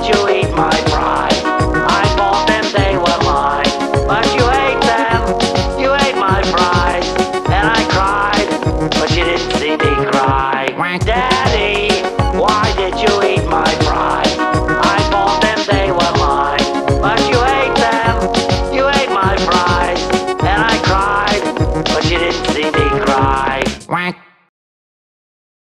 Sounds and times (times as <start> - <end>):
Male singing: 0.0 - 23.7
Music: 0.0 - 24.2.